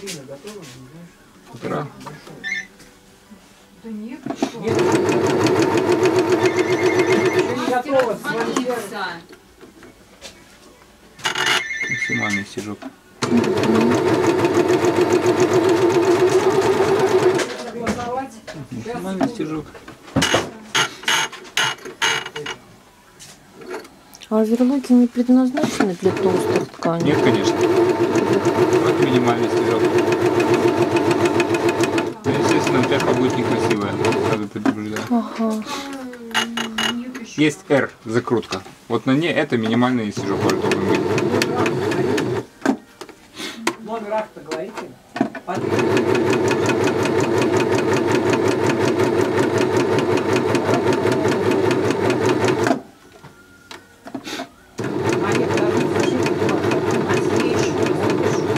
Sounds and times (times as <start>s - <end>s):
Mechanisms: 0.0s - 58.5s.